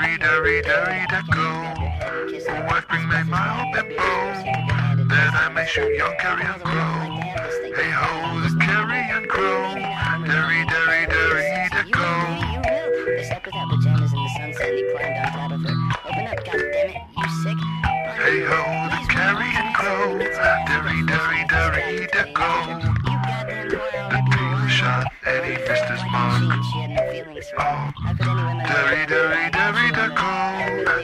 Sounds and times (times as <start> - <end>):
Music: 0.0 - 31.0
Speech: 0.0 - 31.0.